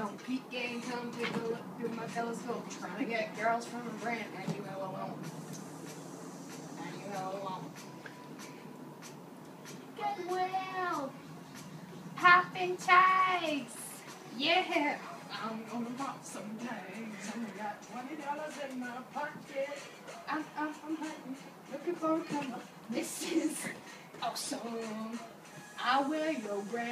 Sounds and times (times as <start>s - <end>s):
Inside, small room: 0.0s - 26.9s
Music: 0.0s - 26.9s.